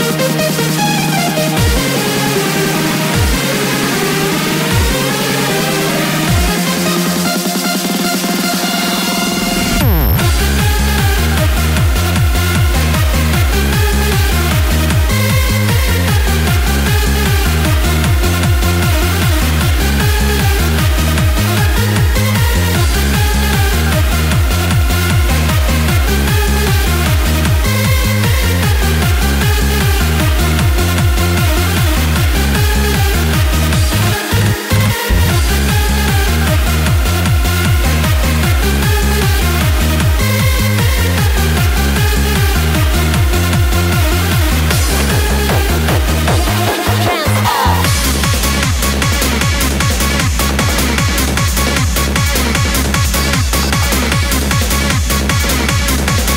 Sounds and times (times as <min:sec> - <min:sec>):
Electronic dance music: 0:00.0 - 0:56.3.